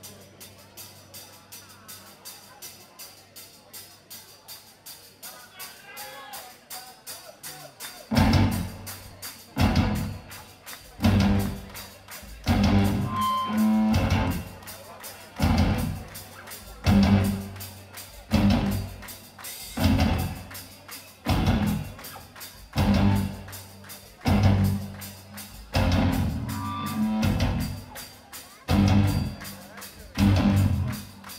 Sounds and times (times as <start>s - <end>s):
Blues: 8.1s - 31.3s.